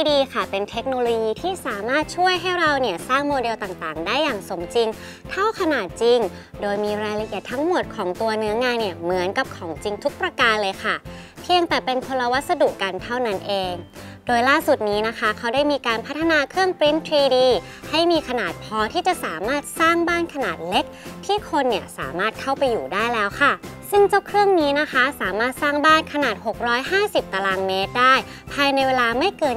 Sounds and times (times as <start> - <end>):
Music: 0.0 - 29.5
Speech: 0.0 - 29.5.